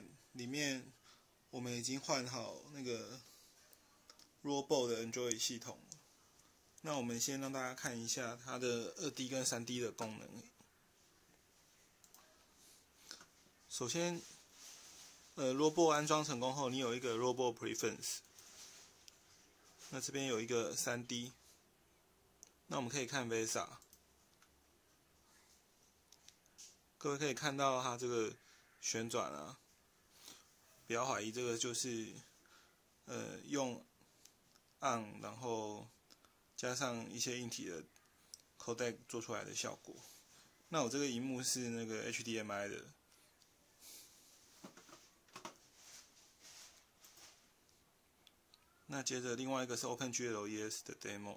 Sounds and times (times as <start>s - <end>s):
Speech: 0.0s - 3.8s, 4.4s - 6.0s, 6.8s - 10.6s, 13.7s - 14.4s, 15.4s - 18.3s, 19.8s - 21.5s, 22.7s - 23.9s, 27.0s - 29.6s, 30.9s - 32.3s, 33.0s - 33.9s, 34.8s - 36.0s, 36.6s - 38.0s, 38.6s - 43.0s, 48.9s - 51.3s.